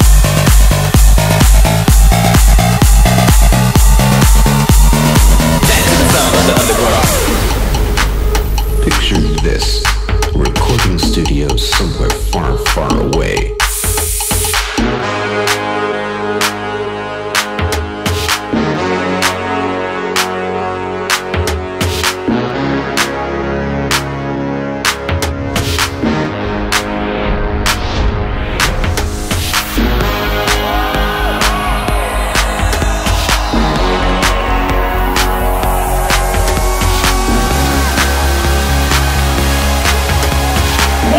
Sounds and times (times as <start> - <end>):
Music: 0.0 - 41.1.